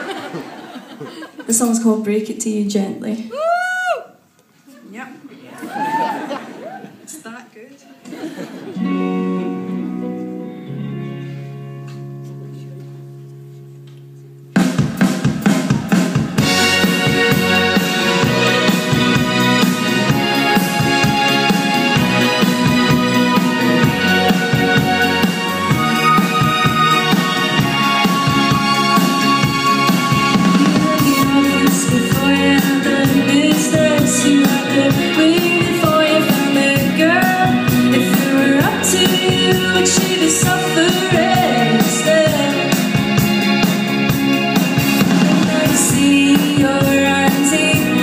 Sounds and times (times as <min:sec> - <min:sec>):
Music: 0:08.6 - 0:48.0.